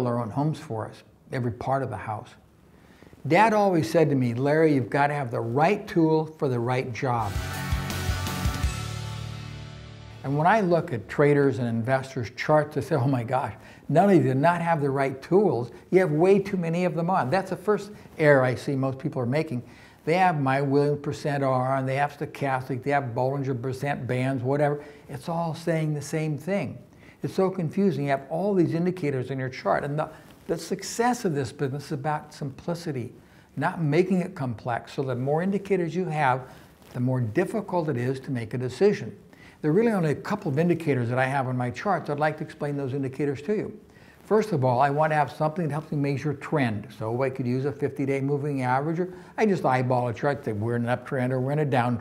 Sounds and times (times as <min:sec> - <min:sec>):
Speech: 0:00.0 - 0:02.4, 0:03.2 - 0:07.4, 0:10.2 - 0:52.0.